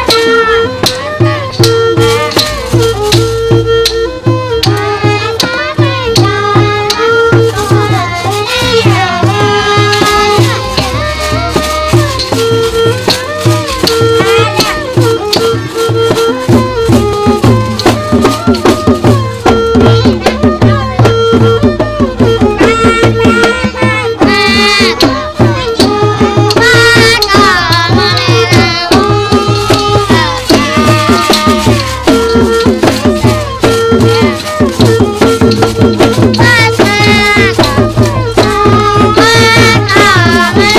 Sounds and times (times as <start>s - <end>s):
Traditional music: 0.0s - 40.7s.